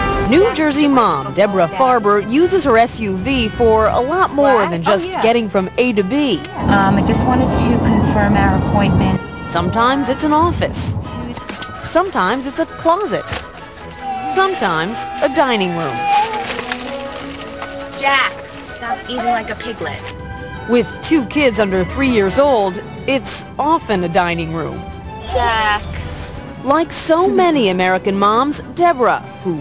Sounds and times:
Music: 0.0 - 29.6
Speech: 0.3 - 13.3, 14.2 - 16.2, 26.6 - 29.6.

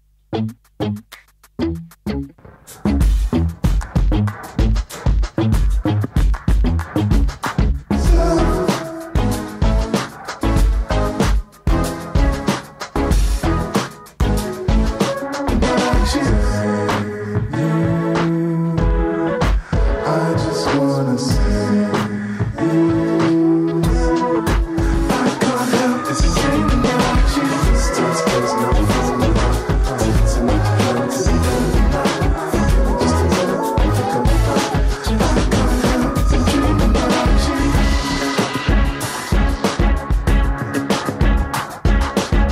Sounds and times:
Music: 0.2 - 42.5.

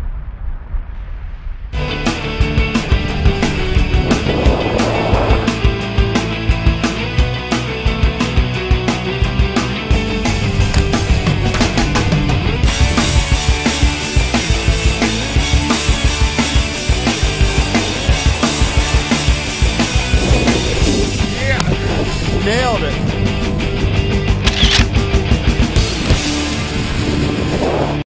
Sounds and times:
Music: 1.7 - 28.0
Speech: 21.3 - 21.8, 22.4 - 23.0.

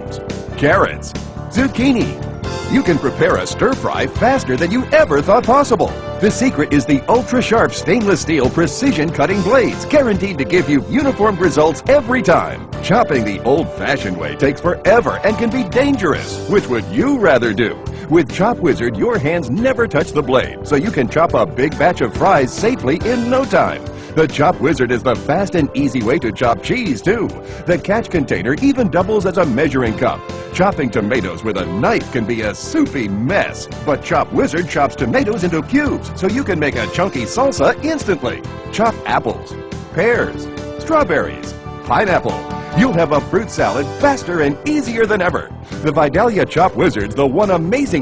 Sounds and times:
Music: 0.0 - 48.0
Speech: 0.0 - 48.0.

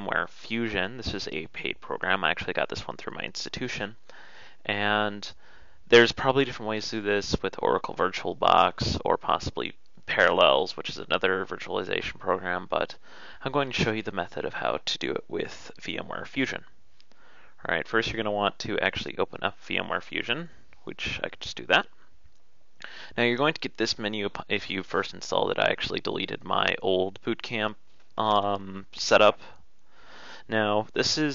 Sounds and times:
Speech: 0.0 - 4.0, 4.6 - 16.8, 17.6 - 21.9, 23.2 - 29.6, 30.5 - 31.3.

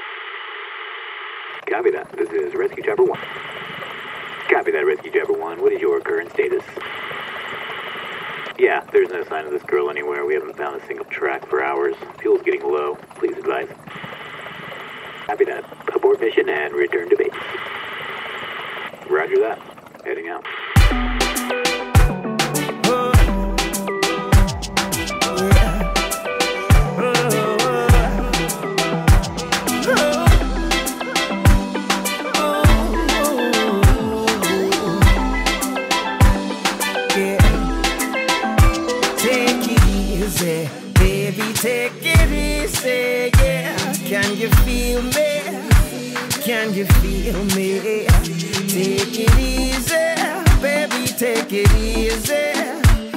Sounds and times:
Speech: 1.7 - 3.2, 4.5 - 6.8, 8.6 - 13.7, 15.3 - 17.4, 19.1 - 20.5
Music: 20.8 - 53.1.

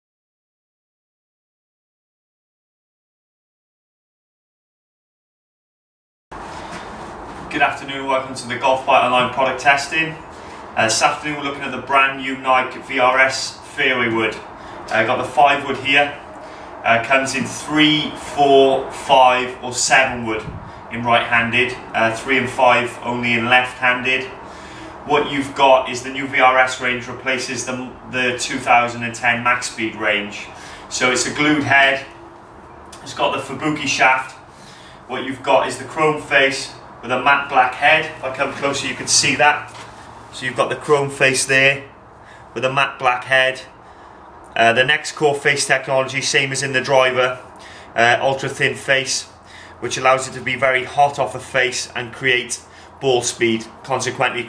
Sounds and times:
Speech: 7.5 - 16.2, 16.8 - 24.4, 25.0 - 32.1, 33.0 - 34.4, 35.1 - 42.0, 42.6 - 43.8, 44.6 - 54.4.

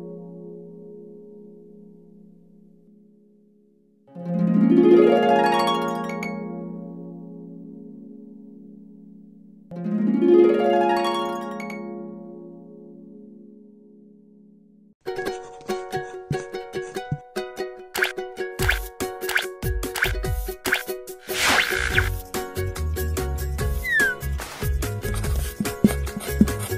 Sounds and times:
Music: 0.0 - 26.7.

